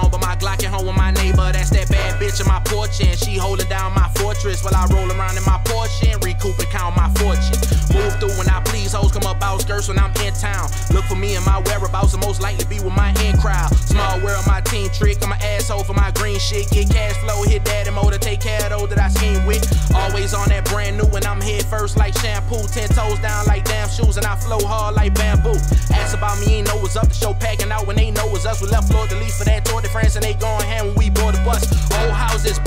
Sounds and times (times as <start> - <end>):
Music: 0.0 - 32.6.